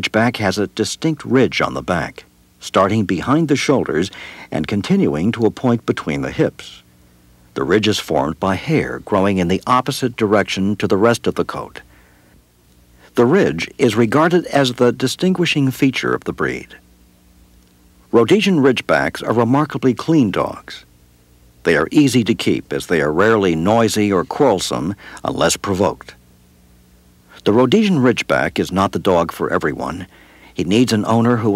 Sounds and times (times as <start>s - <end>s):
Speech: 0.0s - 6.9s, 7.6s - 11.9s, 13.1s - 16.8s, 18.1s - 20.9s, 21.6s - 26.2s, 27.3s - 31.5s.